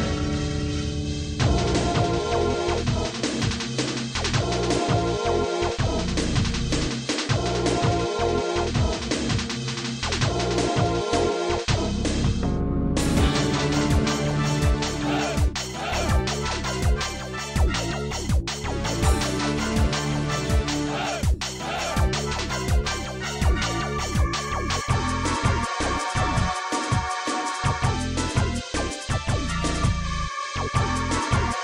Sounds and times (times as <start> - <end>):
Music: 0.0 - 31.6.